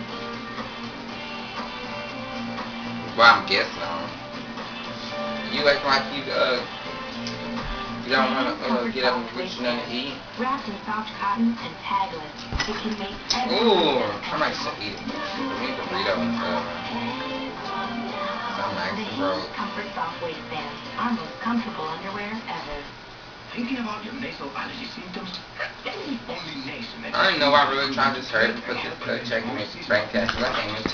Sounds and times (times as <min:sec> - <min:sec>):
Speech: 0:23.5 - 0:30.9.